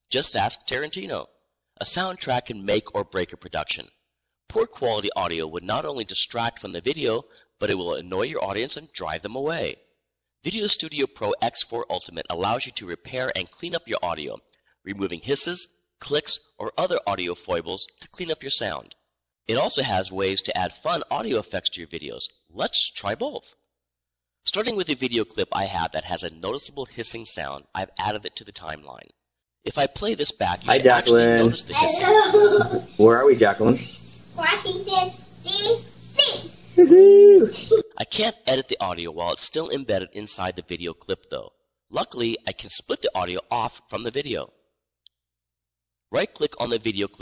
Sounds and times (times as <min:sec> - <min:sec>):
Speech: 0:00.0 - 0:03.9, 0:04.5 - 0:09.8, 0:10.5 - 0:23.6, 0:24.5 - 0:29.1, 0:29.7 - 0:44.5, 0:46.1 - 0:47.2.